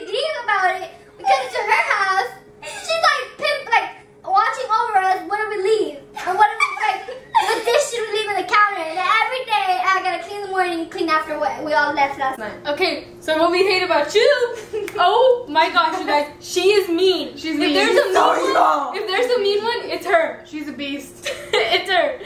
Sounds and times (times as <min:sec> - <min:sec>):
Inside, small room: 0:00.0 - 0:22.2.